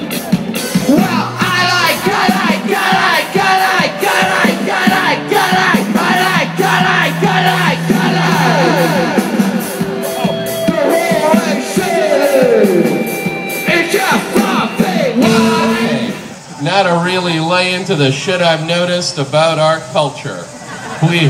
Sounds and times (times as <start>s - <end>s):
Independent music: 0.0s - 17.1s.